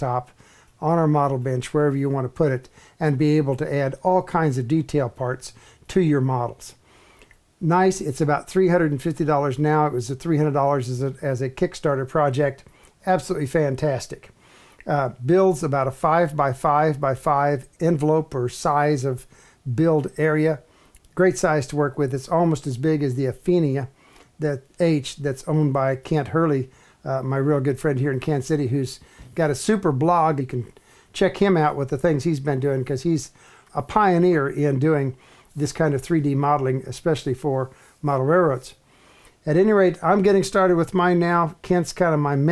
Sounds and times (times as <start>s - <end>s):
Speech: 0.0s - 6.8s, 7.6s - 38.8s, 39.4s - 42.5s.